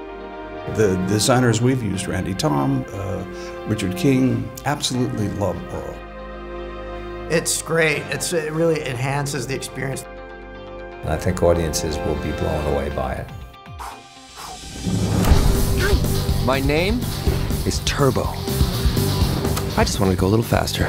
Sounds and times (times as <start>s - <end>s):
Music: 0.0s - 20.8s
Speech: 0.7s - 6.0s, 7.3s - 10.0s, 11.0s - 13.4s, 16.4s - 17.0s, 17.6s - 18.4s, 19.7s - 20.8s.